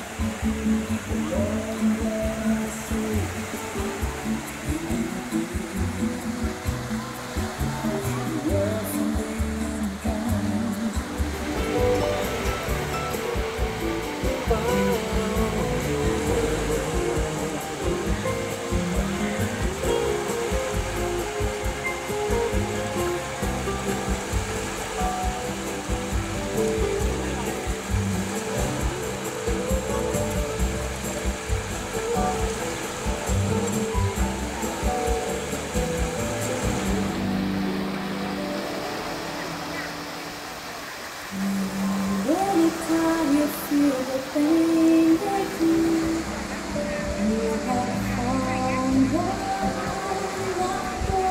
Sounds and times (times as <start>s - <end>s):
Music: 0.0s - 51.3s.